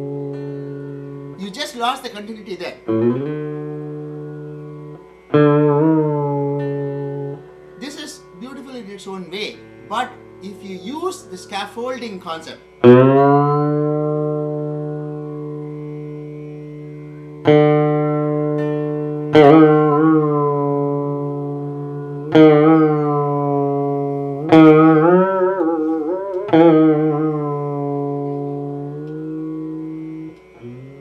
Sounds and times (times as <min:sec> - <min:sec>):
Carnatic music: 0:00.0 - 0:31.0
Plucked string instrument: 0:00.0 - 0:31.0
Speech: 0:01.4 - 0:02.8, 0:07.8 - 0:12.6.